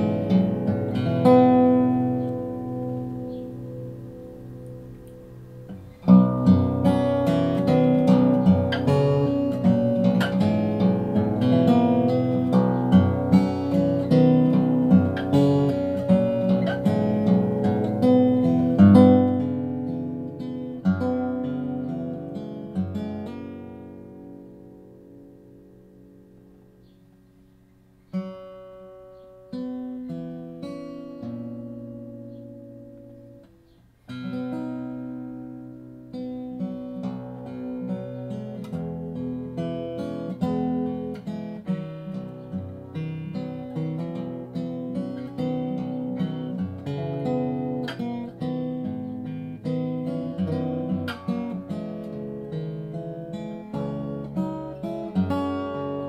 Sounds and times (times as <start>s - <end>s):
Guitar: 0.0s - 56.0s.